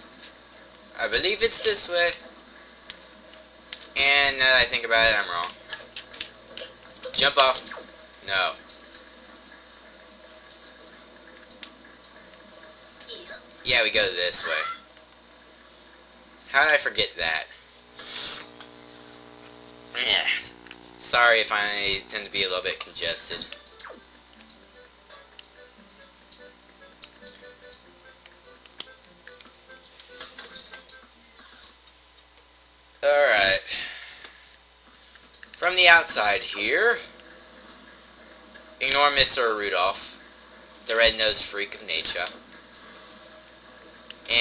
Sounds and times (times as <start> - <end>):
Speech: 1.0 - 2.2, 4.0 - 5.6, 8.3 - 8.6, 13.1 - 14.8, 16.5 - 17.6, 20.0 - 23.5, 35.6 - 37.1, 38.8 - 40.2, 40.9 - 42.4
Music: 23.5 - 31.4, 42.3 - 44.4.